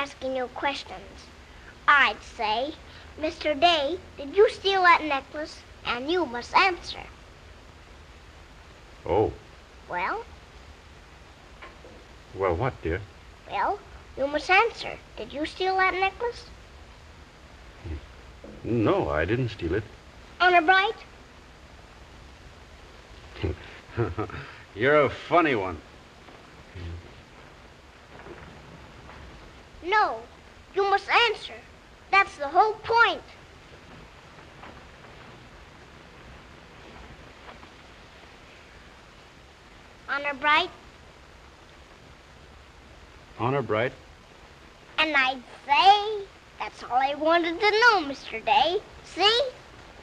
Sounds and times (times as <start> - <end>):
Speech: 1.9 - 7.1, 9.1 - 10.2, 12.4 - 16.5, 18.6 - 21.0, 24.8 - 25.8, 26.8 - 27.0, 30.8 - 31.6, 40.1 - 40.8, 43.4 - 44.0, 45.0 - 49.6.